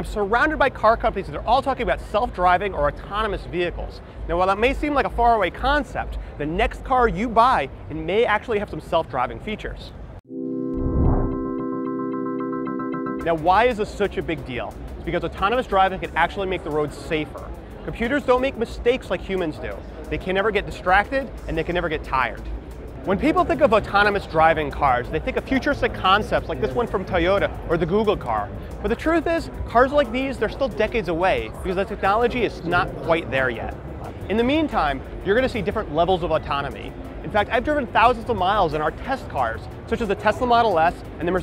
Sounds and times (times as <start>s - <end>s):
Speech: 0.0s - 10.0s, 13.2s - 41.4s.